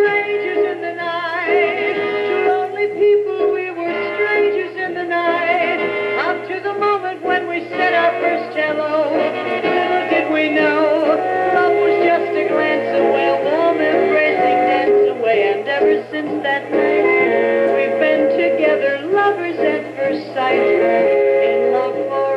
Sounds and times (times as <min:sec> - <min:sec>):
Music: 0:00.0 - 0:22.3
Synthetic singing: 0:02.5 - 0:22.3.